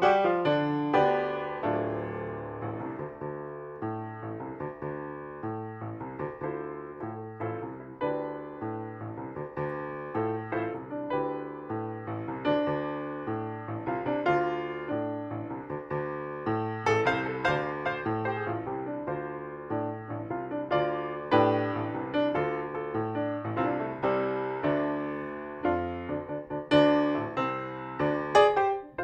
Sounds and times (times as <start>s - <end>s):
Music: 0.0s - 29.0s.